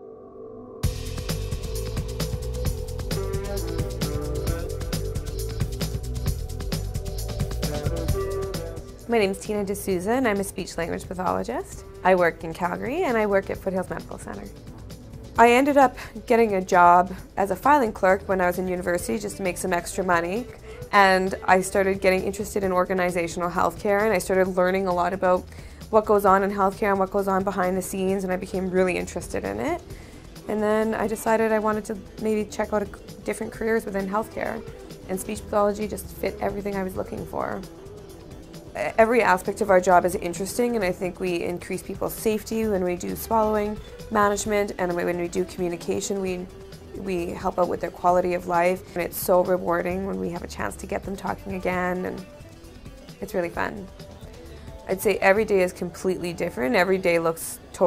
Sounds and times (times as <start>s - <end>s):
Music: 0.0s - 57.8s
Narration, monologue: 0.8s - 57.8s
Female speech, woman speaking: 9.1s - 14.5s, 15.4s - 29.8s, 30.5s - 37.6s, 38.8s - 52.2s, 53.2s - 53.9s, 54.9s - 57.8s.